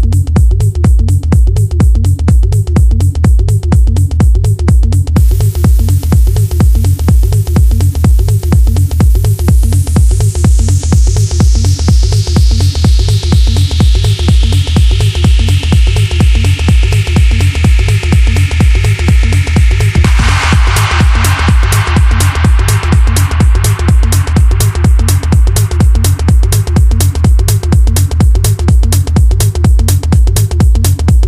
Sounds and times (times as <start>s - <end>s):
Music: 0.0s - 31.2s.